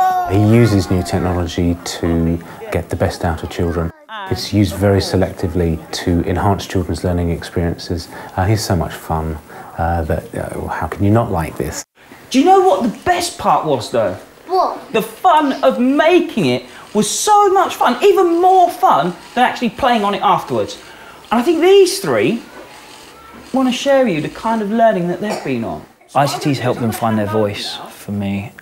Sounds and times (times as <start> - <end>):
Conversation: 0.0 - 28.6.